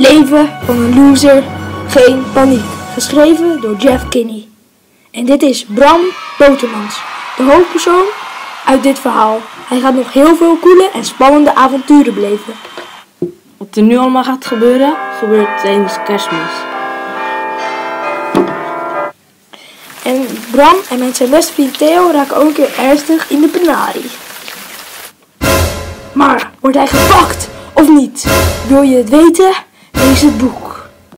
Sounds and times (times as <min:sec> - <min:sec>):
Music: 0:00.0 - 0:04.4, 0:14.4 - 0:19.2, 0:25.4 - 0:31.1
Speech: 0:00.0 - 0:04.6, 0:05.2 - 0:12.6, 0:13.6 - 0:16.6, 0:20.0 - 0:24.2, 0:26.2 - 0:30.9.